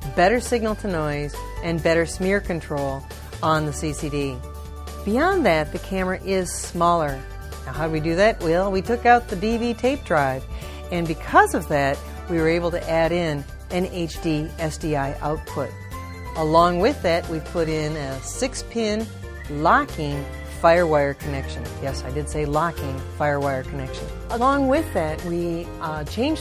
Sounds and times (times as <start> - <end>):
Speech: 0.0 - 4.4, 5.1 - 15.7, 16.4 - 26.4
Music: 0.0 - 26.4.